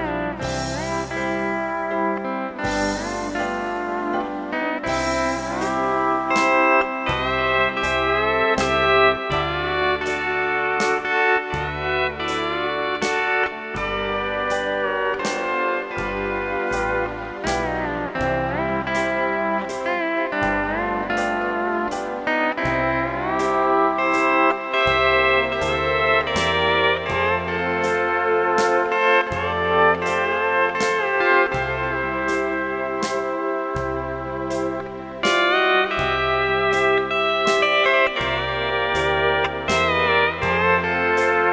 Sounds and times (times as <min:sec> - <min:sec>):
Steel guitar, slide guitar: 0:00.0 - 0:41.5.